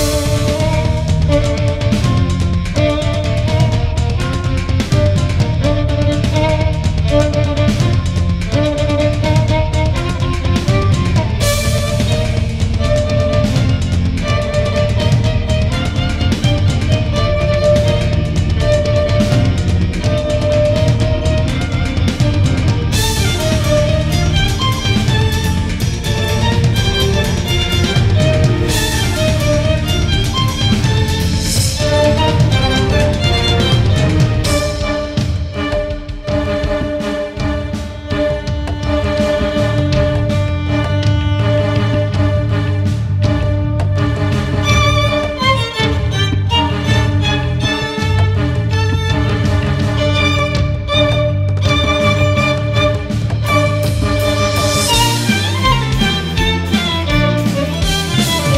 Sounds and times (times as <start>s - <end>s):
Violin, fiddle: 0.0s - 58.5s.